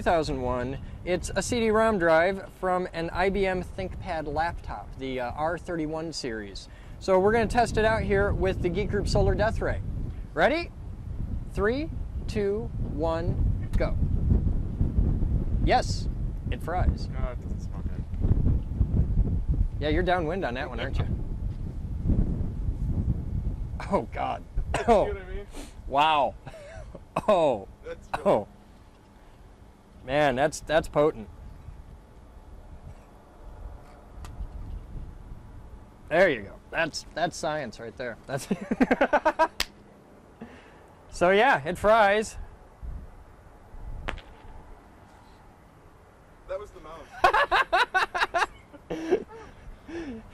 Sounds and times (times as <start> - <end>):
Speech: 0.0 - 9.8, 15.7 - 18.0, 19.8 - 21.1, 23.8 - 26.4, 36.1 - 38.5, 41.1 - 42.4, 46.5 - 47.1.